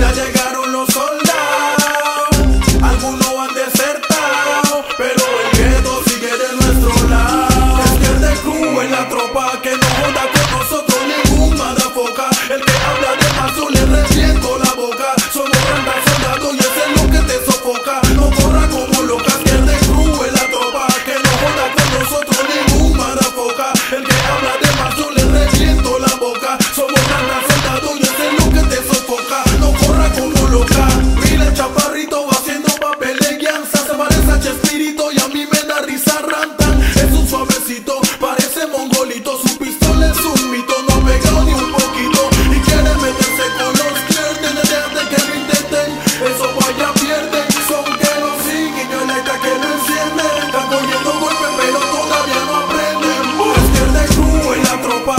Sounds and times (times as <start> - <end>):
Music: 0.0 - 55.1.